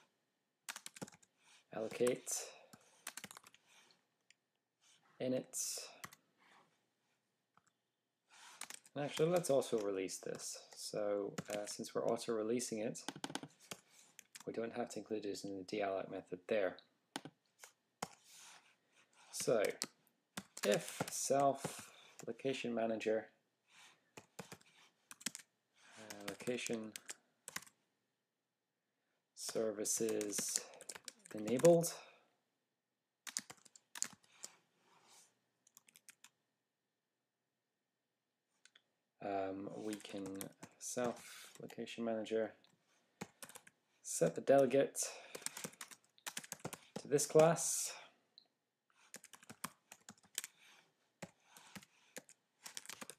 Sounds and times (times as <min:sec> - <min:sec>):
Speech: 0:01.7 - 0:02.6, 0:05.2 - 0:06.0, 0:08.9 - 0:13.1, 0:14.4 - 0:16.9, 0:19.3 - 0:19.8, 0:20.6 - 0:23.4, 0:26.0 - 0:27.0, 0:29.4 - 0:32.2, 0:39.2 - 0:42.6, 0:44.0 - 0:45.2, 0:47.0 - 0:48.2.